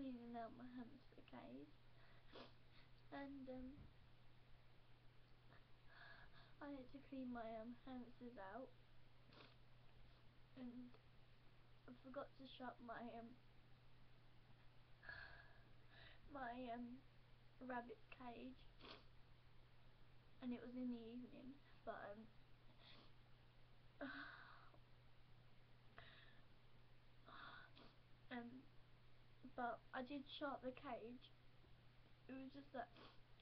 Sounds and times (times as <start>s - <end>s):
Speech: 0.0s - 1.7s, 3.1s - 3.8s, 6.6s - 8.7s, 10.6s - 10.9s, 11.9s - 13.4s, 16.3s - 17.0s, 17.6s - 18.6s, 20.4s - 22.3s, 28.3s - 28.7s, 29.5s - 31.3s, 32.3s - 33.0s.